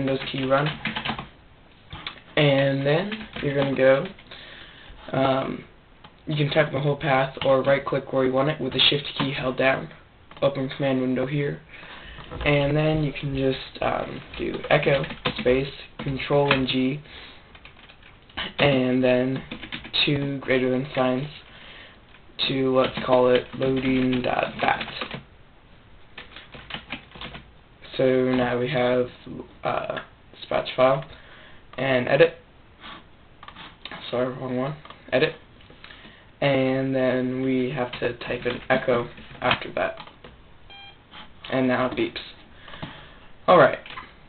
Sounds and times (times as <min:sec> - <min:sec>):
Speech: 0:00.0 - 0:00.8, 0:02.4 - 0:04.2, 0:05.0 - 0:05.7, 0:06.3 - 0:11.7, 0:12.4 - 0:17.1, 0:18.4 - 0:21.5, 0:22.4 - 0:25.2, 0:27.8 - 0:31.1, 0:31.8 - 0:32.4, 0:34.0 - 0:35.4, 0:36.4 - 0:40.1, 0:41.5 - 0:42.4, 0:43.5 - 0:44.0.